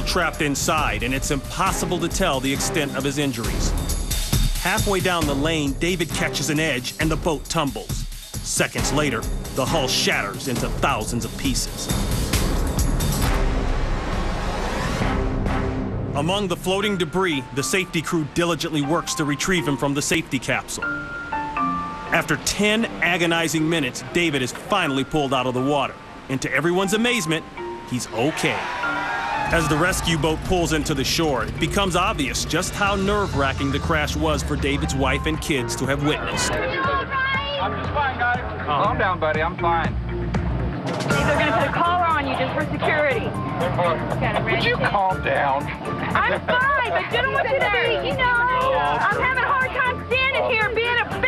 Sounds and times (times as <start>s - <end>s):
Music: 0.0s - 51.2s
Speech: 8.5s - 11.9s.